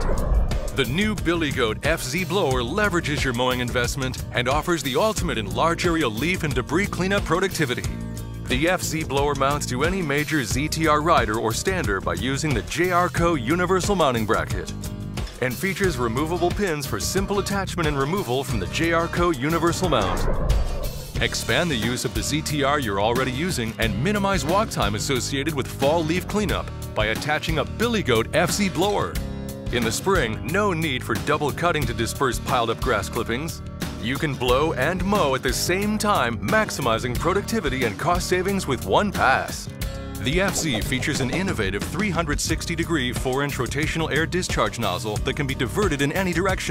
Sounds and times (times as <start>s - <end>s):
Music: 0.0s - 46.7s
Speech: 0.8s - 14.7s, 15.4s - 20.3s, 21.2s - 46.7s.